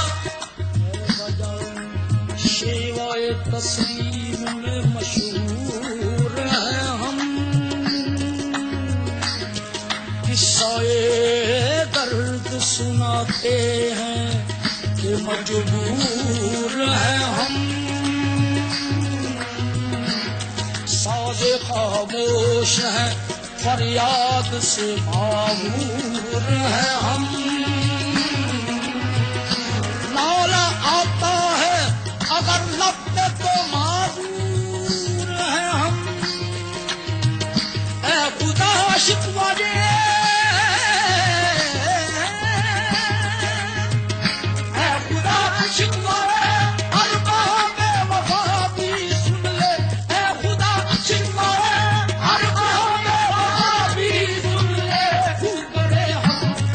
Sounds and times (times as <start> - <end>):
Music: 0.0 - 56.7.